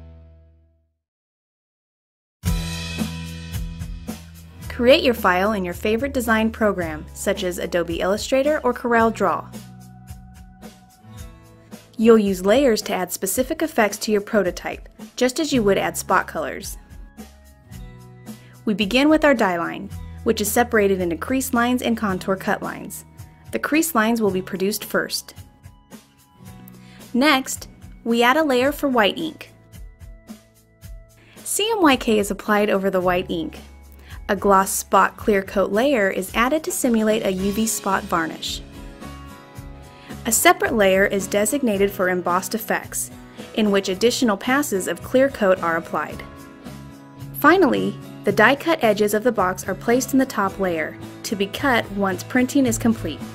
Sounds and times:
Music: 0.0 - 1.0, 2.4 - 53.3
Speech: 4.7 - 9.5, 12.0 - 16.8, 18.6 - 23.0, 23.6 - 25.4, 27.2 - 29.5, 31.5 - 33.7, 34.3 - 38.6, 40.2 - 46.3, 47.4 - 53.3.

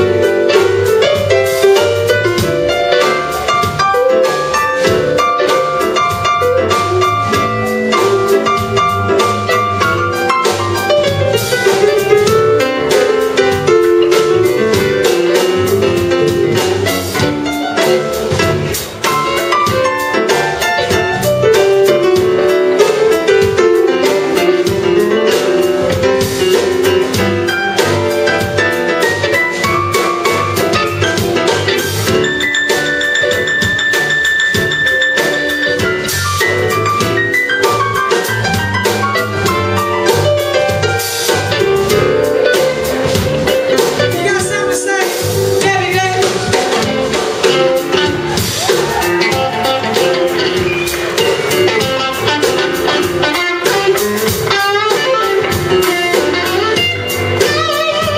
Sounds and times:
Drum: 0.0 - 58.1
Drum kit: 0.0 - 58.1.

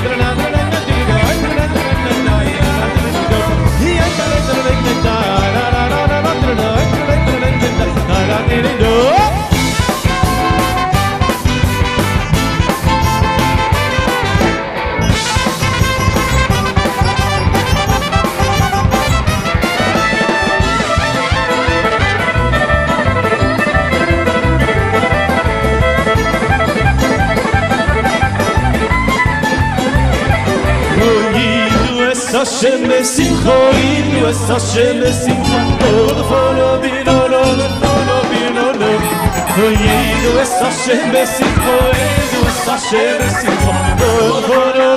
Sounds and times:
Violin, fiddle: 15.0 - 32.3.

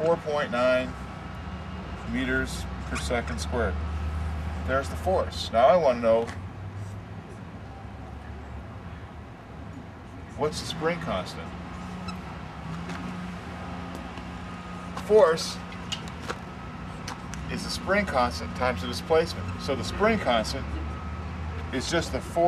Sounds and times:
Speech: 15.0 - 15.6, 21.7 - 22.4.

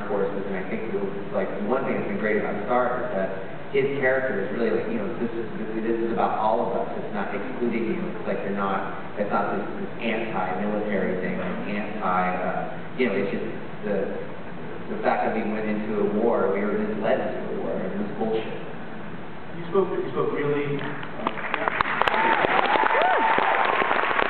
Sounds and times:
Male speech, man speaking: 0.0 - 14.2, 14.9 - 18.6, 19.6 - 21.0.

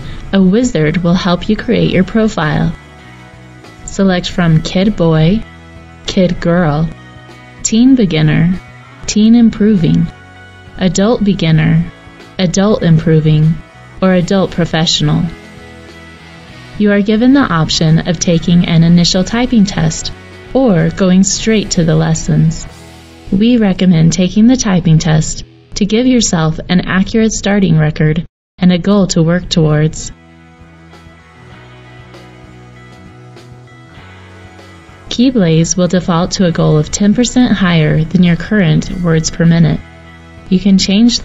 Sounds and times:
Music: 0.0 - 41.2
Speech: 0.2 - 2.8, 3.9 - 5.5, 6.1 - 7.0, 7.6 - 10.1, 10.8 - 15.4, 16.8 - 22.7, 23.3 - 30.2, 35.1 - 39.8, 40.5 - 41.2.

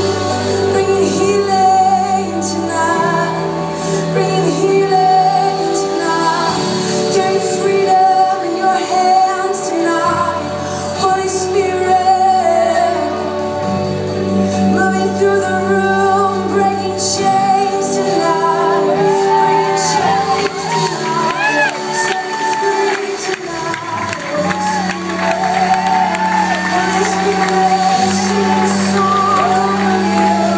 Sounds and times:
Female singing: 0.0 - 30.5
Music: 0.0 - 30.5.

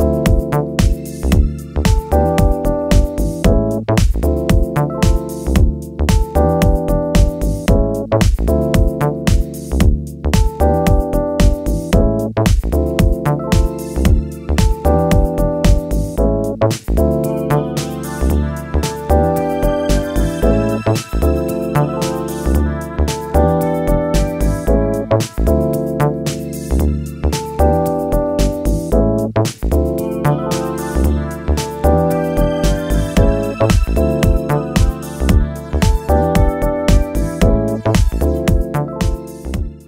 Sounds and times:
Music: 0.0 - 39.8.

